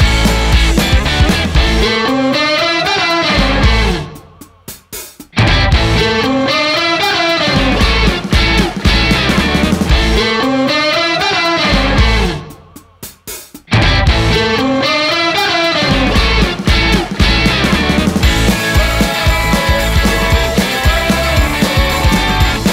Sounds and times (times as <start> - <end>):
Music: 0.0 - 22.7.